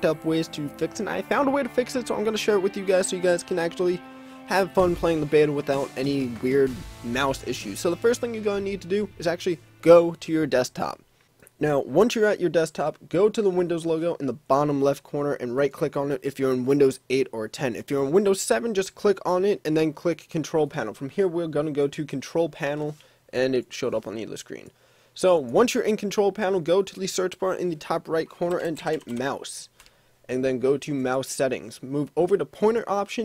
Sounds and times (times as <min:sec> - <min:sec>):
Speech: 0:00.0 - 0:11.0, 0:11.6 - 0:29.7, 0:30.3 - 0:33.2.